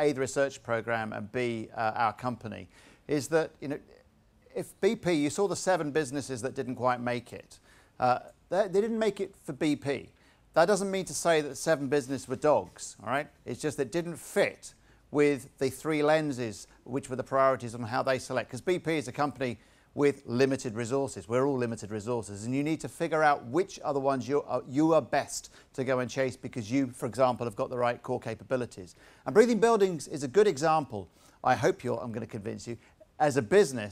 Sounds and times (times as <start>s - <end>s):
Speech: 0.0s - 33.9s.